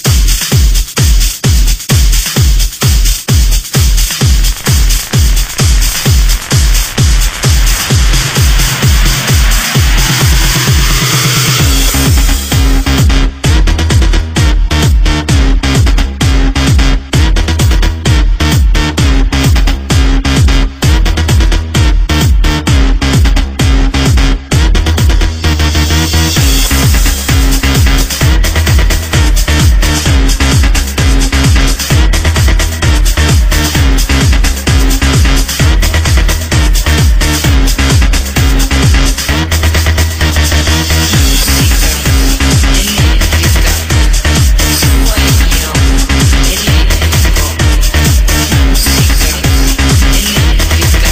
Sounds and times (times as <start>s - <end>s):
Electronica: 0.0s - 51.1s.